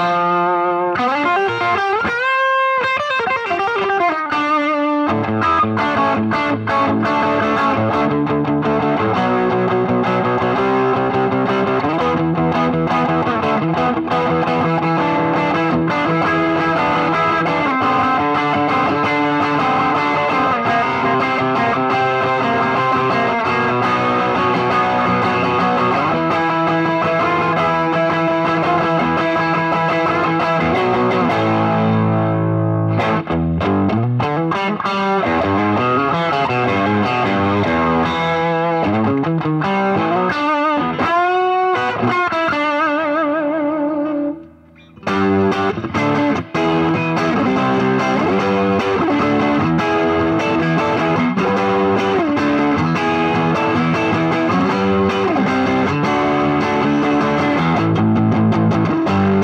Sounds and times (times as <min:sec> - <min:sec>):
Bass guitar: 0:00.0 - 0:59.4
Electric guitar: 0:00.0 - 0:59.4.